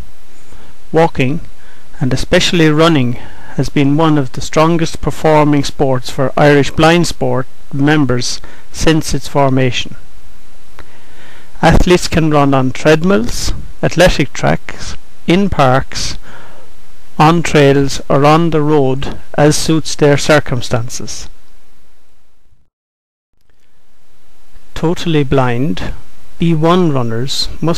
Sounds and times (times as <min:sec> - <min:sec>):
Speech: 0:00.9 - 0:10.0, 0:11.6 - 0:16.2, 0:17.2 - 0:21.4, 0:24.8 - 0:27.7.